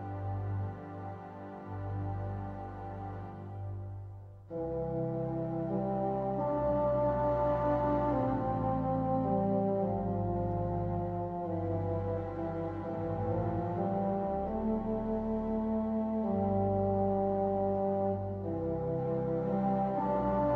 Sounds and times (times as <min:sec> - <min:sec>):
Sad music: 0:00.0 - 0:20.5
Tender music: 0:00.0 - 0:20.5.